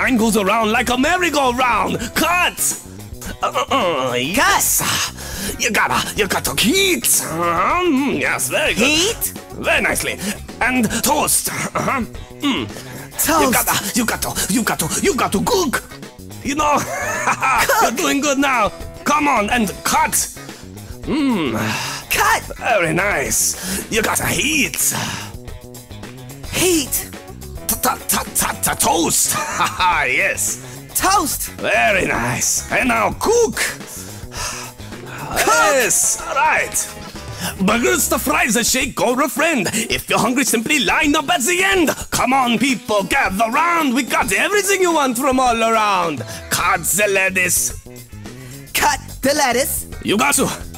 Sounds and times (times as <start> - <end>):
Music: 0.0 - 50.7.